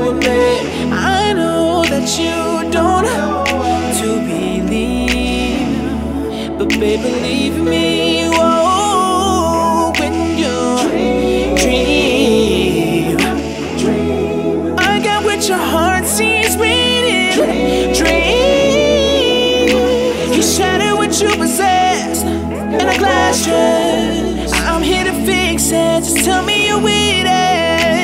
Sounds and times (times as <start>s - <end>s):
Music: 0.0s - 28.0s.